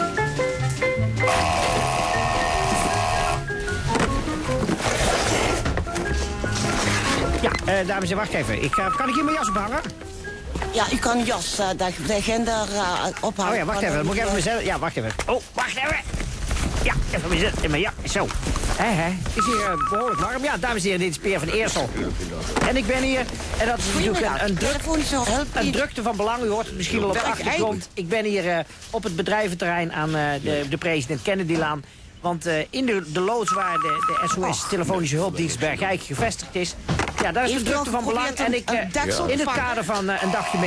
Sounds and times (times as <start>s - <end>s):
Music: 0.0s - 13.2s.